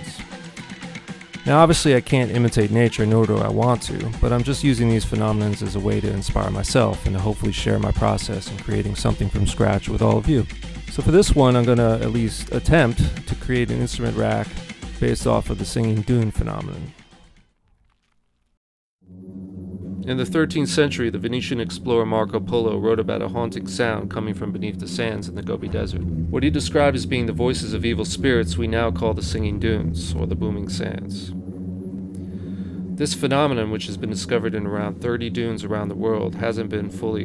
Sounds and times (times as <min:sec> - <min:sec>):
Speech: 0:00.0 - 0:00.2, 0:01.5 - 0:16.9, 0:20.1 - 0:31.4, 0:33.0 - 0:37.2
Music: 0:00.0 - 0:17.6, 0:20.0 - 0:37.2.